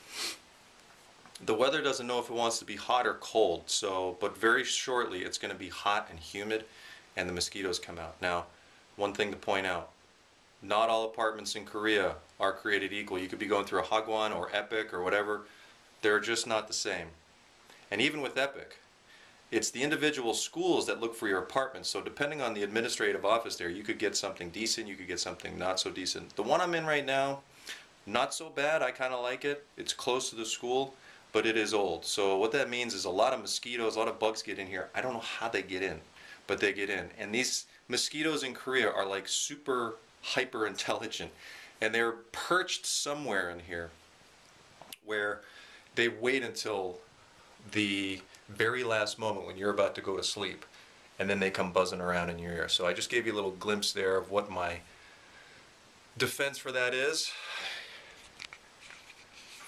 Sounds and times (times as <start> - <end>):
Speech: 1.4 - 10.0, 10.6 - 17.2, 17.9 - 18.8, 19.5 - 44.0, 44.9 - 45.4, 46.0 - 54.9, 56.2 - 57.4.